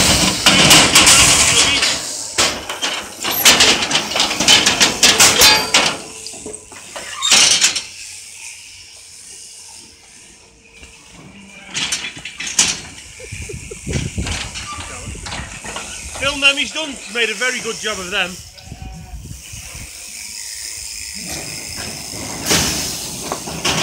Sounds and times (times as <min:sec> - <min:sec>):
Speech: 0:16.2 - 0:18.4
Bleat: 0:18.5 - 0:19.3.